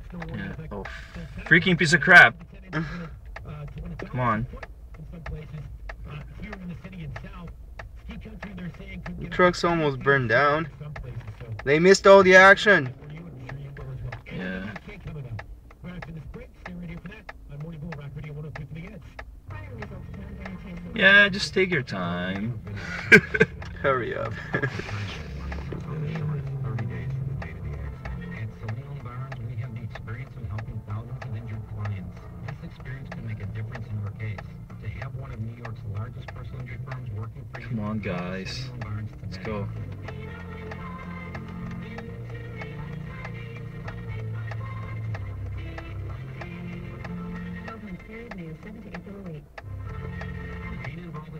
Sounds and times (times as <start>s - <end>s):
Speech: 0.0s - 39.9s, 47.6s - 49.5s, 50.6s - 51.4s
Vehicle: 0.0s - 51.4s.